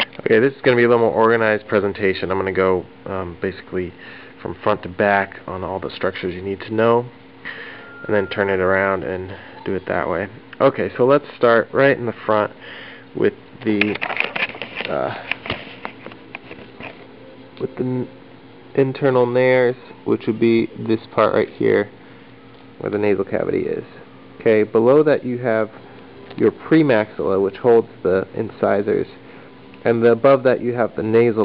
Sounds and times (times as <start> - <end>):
Speech: 0.0 - 7.1, 8.1 - 12.6, 13.2 - 14.0, 14.9 - 15.2, 17.6 - 18.1, 18.8 - 21.9, 22.8 - 25.8, 26.4 - 29.2, 29.8 - 31.4.